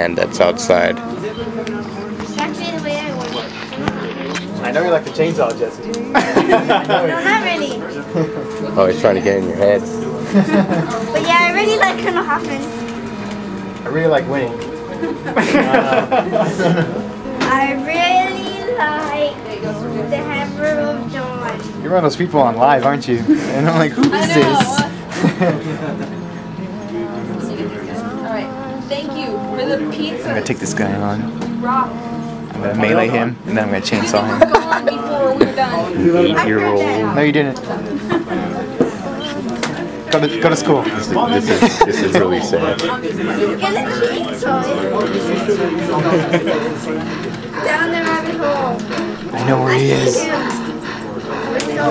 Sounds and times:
Music: 0.0 - 51.9.

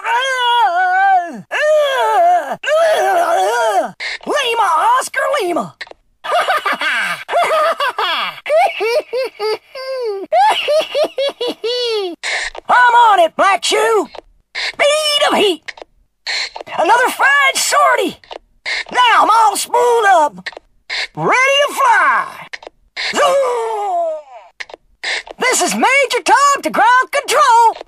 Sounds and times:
Speech: 3.0 - 5.8, 12.7 - 14.2, 14.8 - 15.7, 16.7 - 18.2, 18.9 - 20.5, 21.2 - 22.5, 25.4 - 27.8.

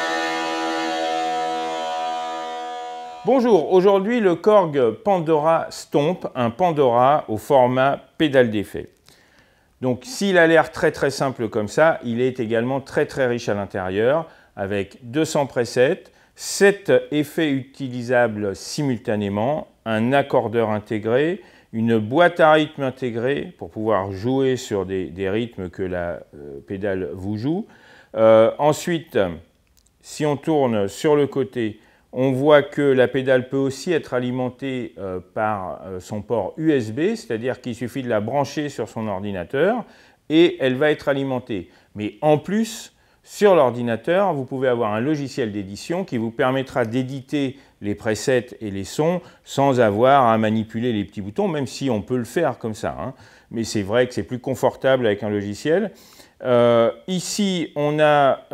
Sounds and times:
Speech: 3.3 - 9.0, 9.8 - 58.5.

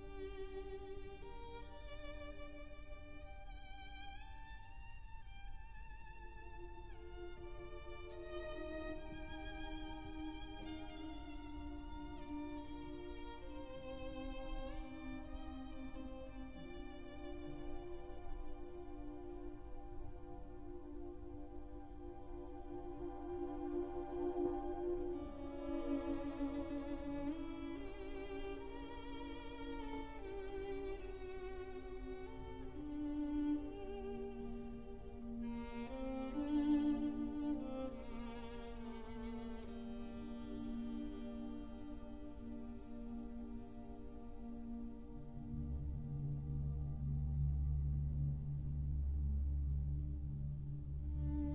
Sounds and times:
Orchestra: 0.0 - 51.5
Violin, fiddle: 0.0 - 51.5.

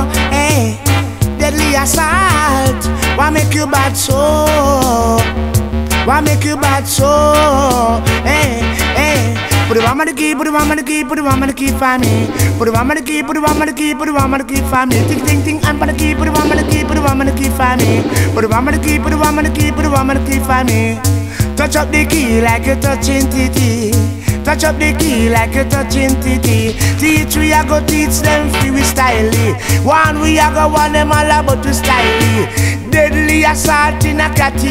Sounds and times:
Music: 0.0 - 34.7
Echo: 14.7 - 21.4, 24.8 - 28.8.

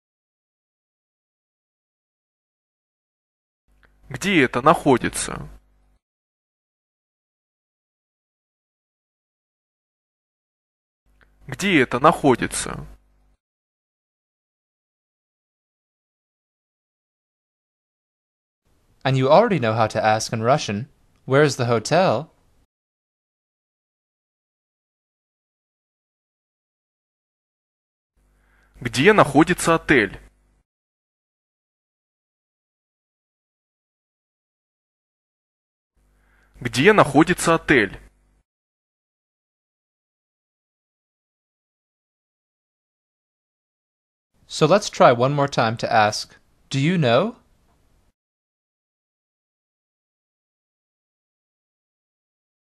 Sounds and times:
Speech: 4.1 - 5.6, 11.5 - 13.0, 19.0 - 22.4, 28.8 - 30.3, 36.6 - 38.1, 44.5 - 47.4.

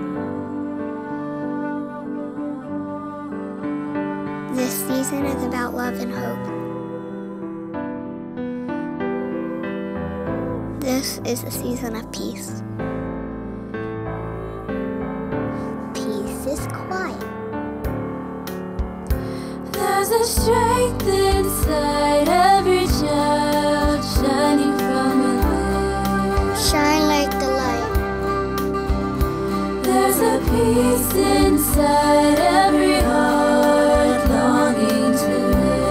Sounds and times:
Music: 0.0 - 35.9
Speech: 4.5 - 6.5, 10.8 - 12.6, 15.9 - 17.3, 26.6 - 27.9.

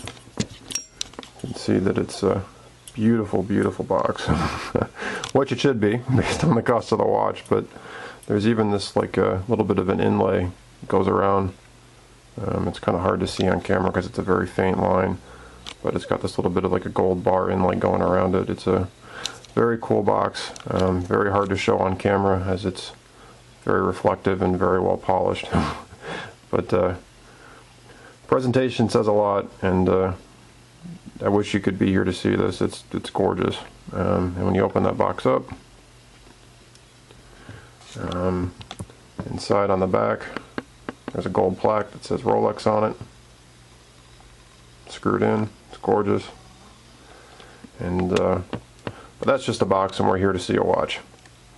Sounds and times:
Inside, small room: 0.0 - 51.5
Speech: 1.4 - 4.5, 5.3 - 11.6, 12.4 - 15.2, 15.8 - 19.0, 19.6 - 23.0, 23.6 - 25.8, 26.5 - 27.1, 28.3 - 35.6, 37.9 - 38.6, 39.2 - 40.5, 41.1 - 43.1, 44.9 - 46.4, 47.8 - 48.6, 49.2 - 51.1.

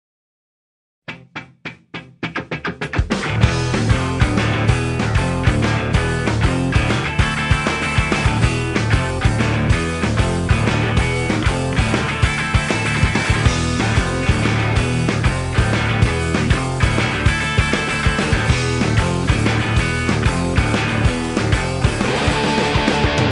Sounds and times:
Music: 1.1 - 23.3.

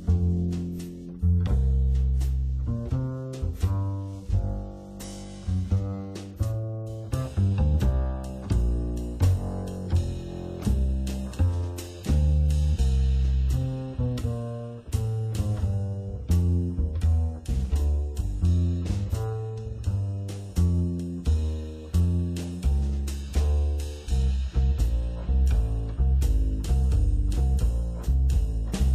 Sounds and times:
Blues: 0.0 - 28.9
Strum: 0.0 - 28.9.

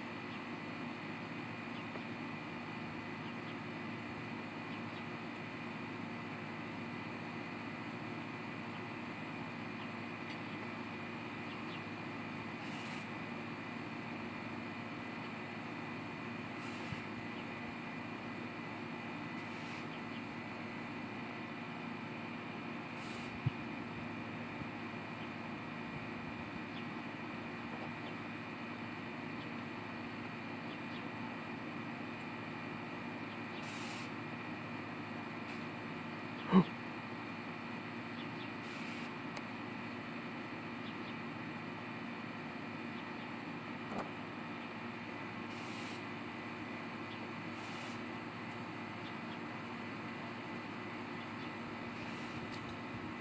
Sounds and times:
Animal: 12.6 - 13.2, 19.4 - 20.3, 33.5 - 34.2, 36.4 - 36.9, 45.5 - 46.1, 47.1 - 48.1.

